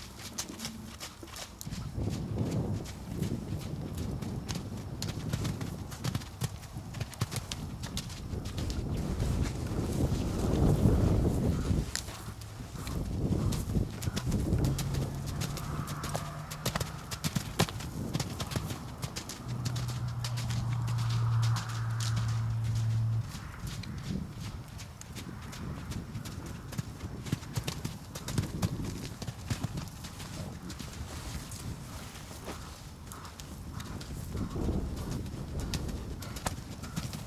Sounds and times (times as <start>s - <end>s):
Horse: 0.0s - 37.2s.